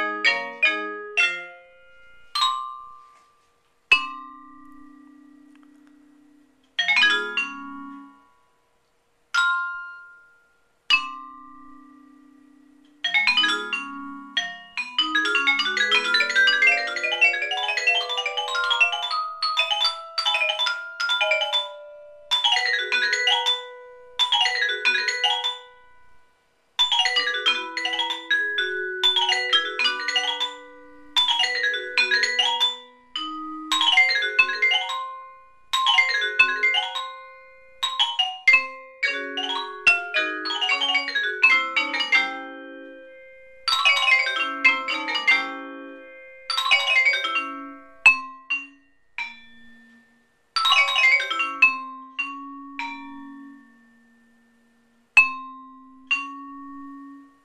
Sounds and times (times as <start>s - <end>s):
Vibraphone: 0.0s - 57.4s.